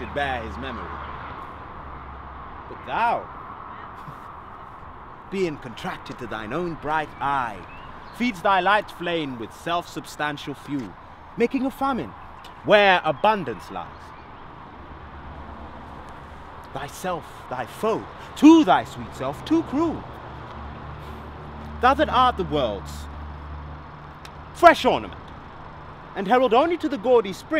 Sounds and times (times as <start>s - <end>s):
Speech: 0.0s - 0.9s, 2.7s - 3.3s, 5.3s - 12.1s, 16.7s - 20.0s, 21.8s - 23.1s, 24.6s - 25.2s, 26.2s - 27.6s.